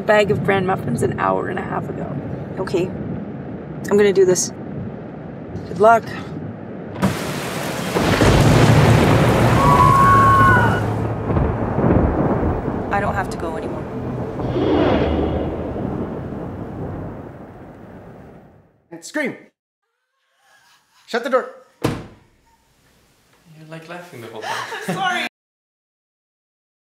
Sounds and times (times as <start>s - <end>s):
Speech: 0.0s - 2.9s, 12.9s - 13.8s, 18.9s - 19.5s, 23.5s - 25.3s.